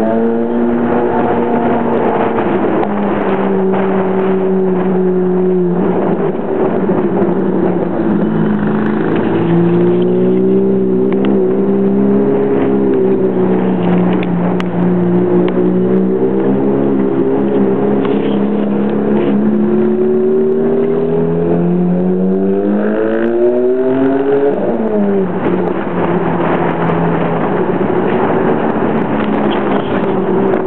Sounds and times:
Outside, urban or manmade: 0.0s - 30.6s
Race car, auto racing: 0.0s - 30.6s.

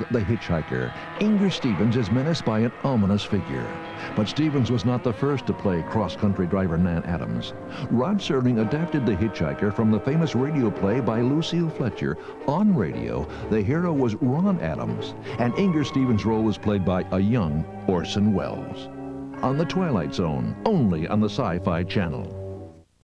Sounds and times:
Speech: 0.0s - 22.3s
Music: 0.0s - 23.0s.

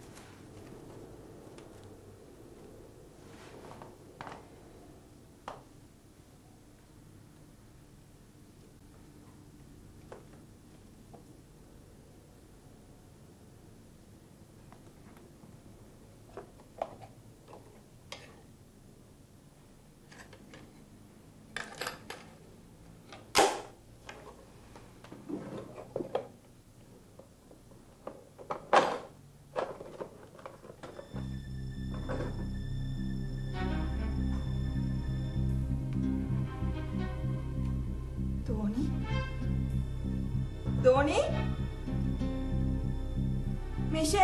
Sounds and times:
Inside, small room: 0.0s - 44.2s.

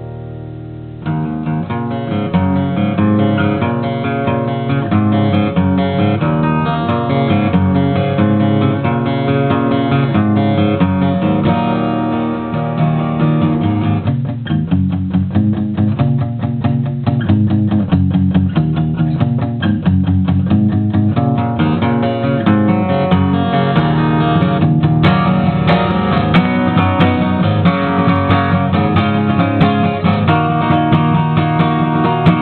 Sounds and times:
Acoustic guitar: 0.0s - 32.4s
Strum: 0.0s - 32.4s.

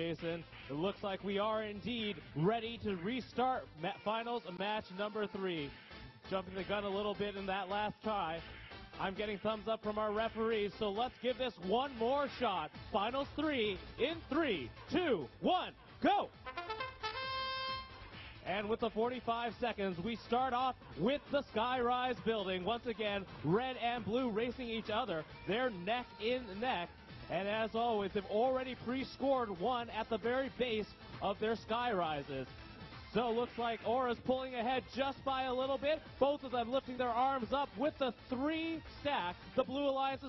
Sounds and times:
Speech: 0.0s - 5.7s, 6.3s - 8.4s, 9.0s - 16.4s, 18.4s - 32.5s, 33.1s - 40.2s.

